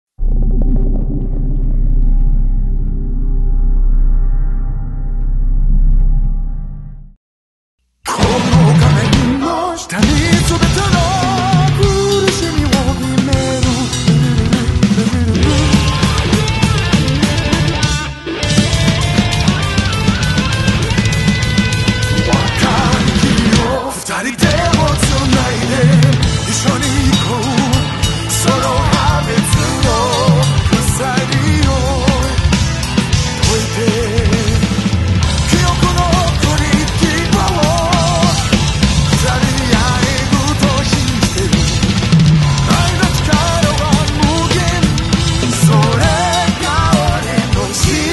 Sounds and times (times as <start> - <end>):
Bass drum: 0.2 - 7.2, 10.0 - 23.8, 24.4 - 48.1
Drum kit: 8.1 - 48.1
Rock music: 8.1 - 48.1.